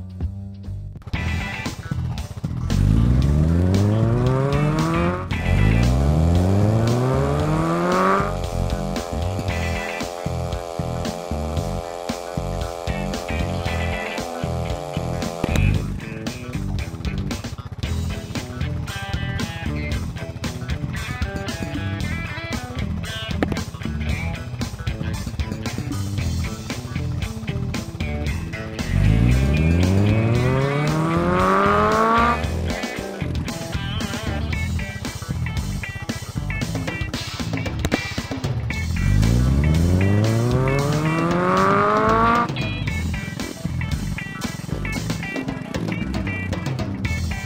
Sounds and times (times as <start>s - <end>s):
Music: 0.0s - 47.4s.